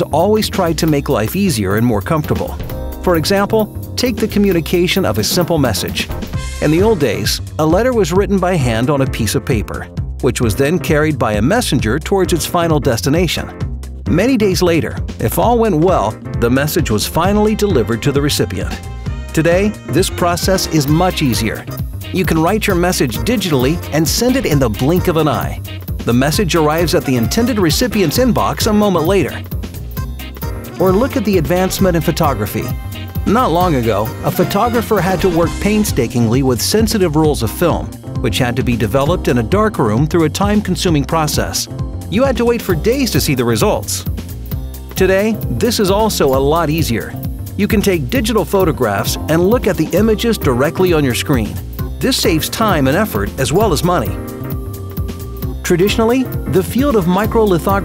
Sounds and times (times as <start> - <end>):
Speech: 0.0 - 13.5, 14.1 - 29.4, 30.8 - 44.1, 45.0 - 54.2, 55.6 - 57.8
Music: 0.0 - 57.8.